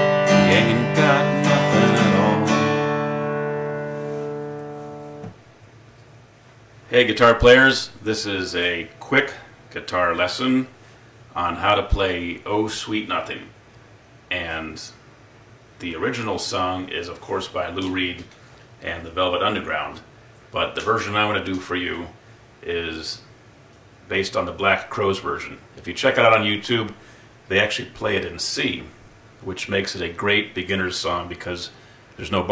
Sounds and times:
Speech: 6.9s - 13.6s, 14.3s - 15.0s, 15.8s - 23.3s, 24.1s - 32.5s.

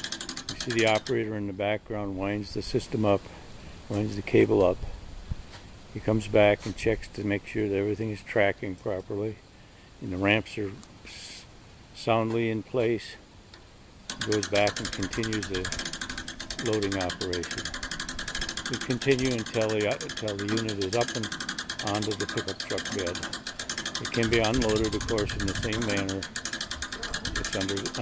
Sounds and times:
Speech: 0.6s - 3.3s, 3.9s - 4.8s, 6.0s - 9.4s, 10.0s - 13.2s, 14.2s - 15.7s, 16.6s - 17.6s, 18.7s - 23.2s, 24.0s - 26.3s, 27.2s - 28.0s.

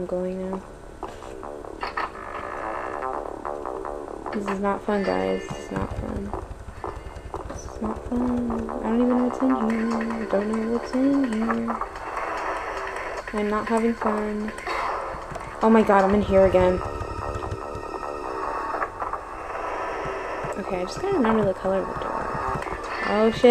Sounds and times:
Speech: 0.0s - 0.6s, 4.4s - 6.4s, 7.5s - 11.8s, 13.4s - 14.5s, 15.6s - 16.9s, 20.6s - 22.1s, 23.0s - 23.5s.

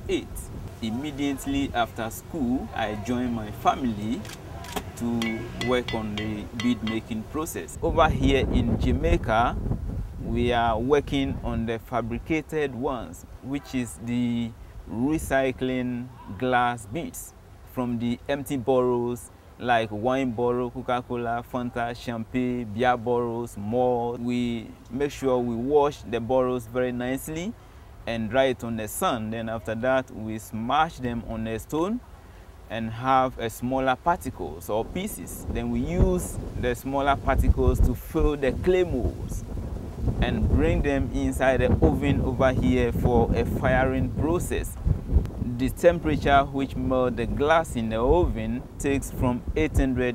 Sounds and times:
Speech: 0.0s - 4.3s, 4.9s - 9.6s, 10.3s - 32.0s, 32.7s - 39.4s, 40.2s - 44.8s, 45.4s - 50.1s.

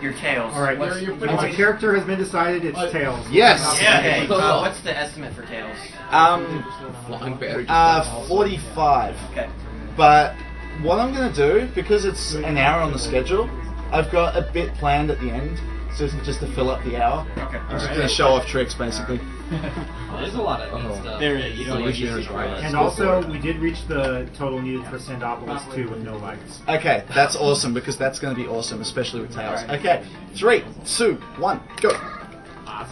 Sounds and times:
Music: 0.0s - 32.9s.

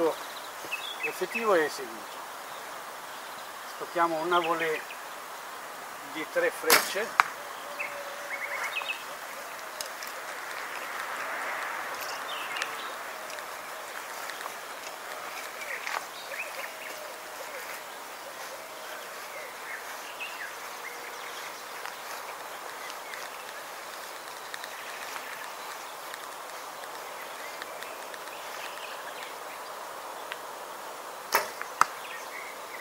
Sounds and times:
Arrow: 6.7s - 7.3s, 31.3s - 32.0s.

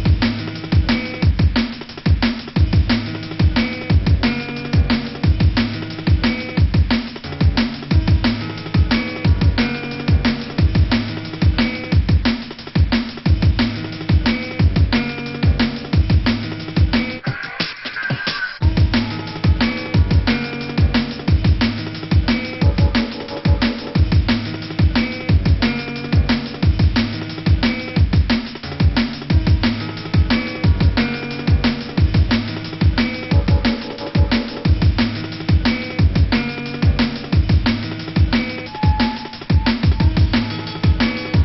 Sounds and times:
Music: 0.0s - 41.4s.

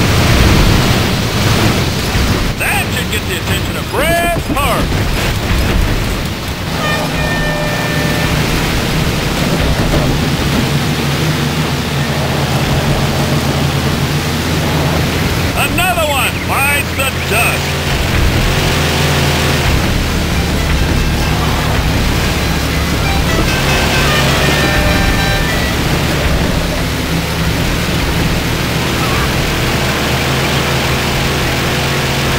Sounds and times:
Speech: 2.6s - 5.0s, 15.6s - 17.7s.

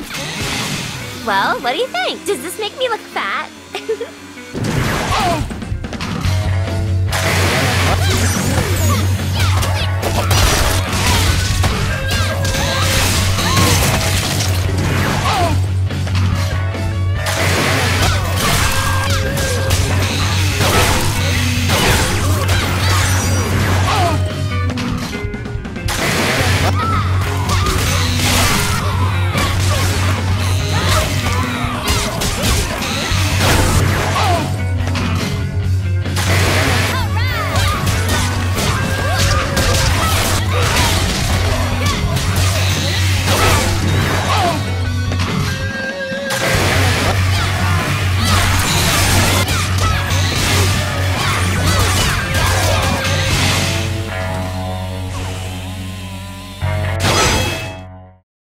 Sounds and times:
Music: 0.0s - 58.2s.

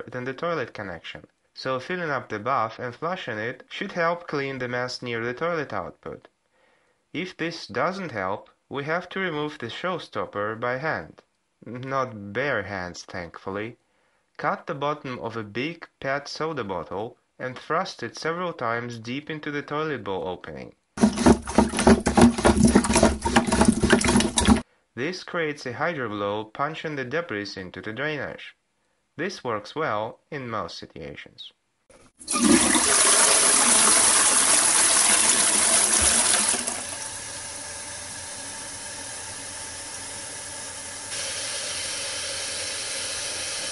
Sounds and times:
Speech: 0.0s - 6.3s, 7.2s - 13.8s, 14.4s - 20.8s, 25.0s - 28.6s, 29.2s - 31.6s
Toilet flush: 21.0s - 24.6s, 32.2s - 43.7s.

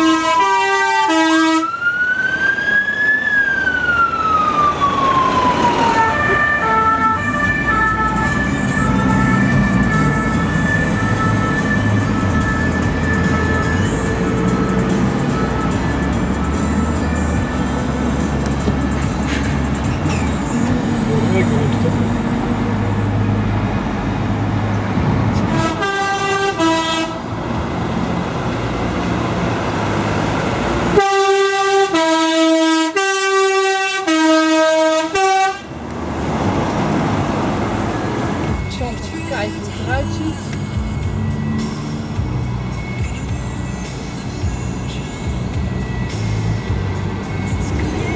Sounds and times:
Vehicle horn, car horn, honking: 0.0s - 1.7s, 25.5s - 27.2s, 31.0s - 35.7s
Traffic noise, roadway noise: 0.0s - 48.1s.

